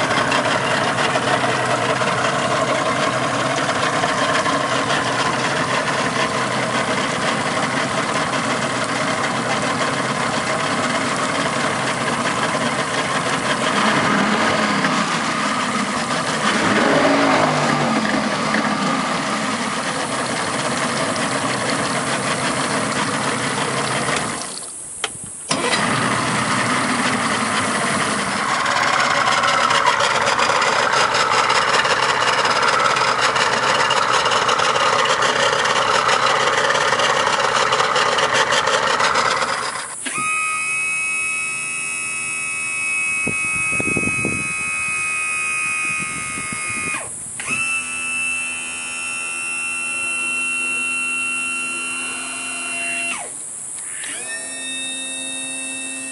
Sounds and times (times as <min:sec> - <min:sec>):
Motorboat, speedboat: 0:00.0 - 0:24.7, 0:25.5 - 0:56.1.